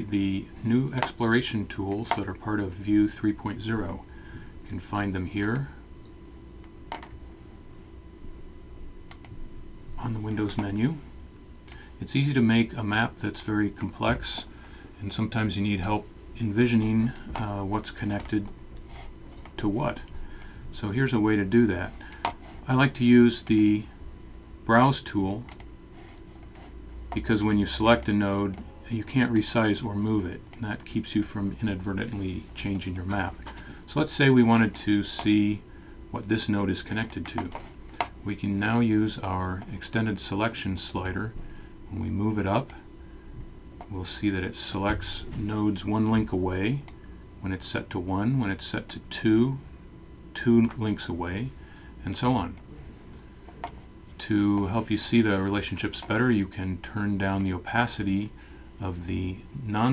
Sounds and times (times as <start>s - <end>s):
Speech: 0.0s - 4.1s, 4.7s - 5.8s, 10.0s - 11.1s, 12.0s - 18.6s, 19.6s - 20.1s, 20.7s - 22.0s, 22.6s - 24.0s, 24.6s - 25.6s, 27.1s - 37.6s, 38.2s - 42.9s, 43.9s - 49.7s, 50.3s - 53.0s, 54.2s - 59.9s.